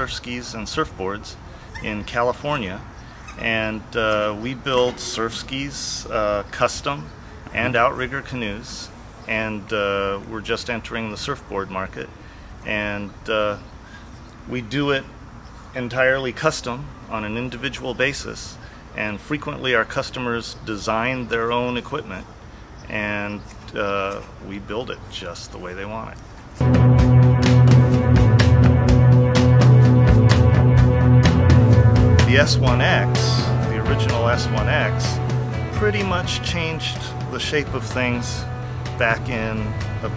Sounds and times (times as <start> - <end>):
Speech: 0.0 - 13.7, 14.5 - 15.1, 15.8 - 22.3, 22.9 - 26.2, 32.2 - 35.2, 35.8 - 40.1.